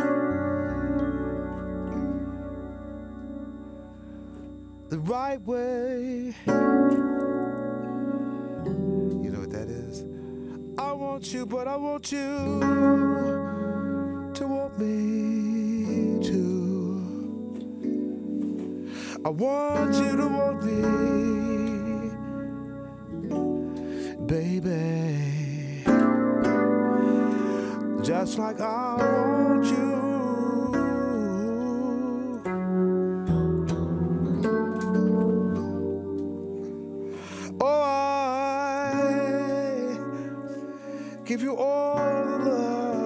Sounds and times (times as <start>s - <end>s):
Electric piano: 0.0s - 43.0s.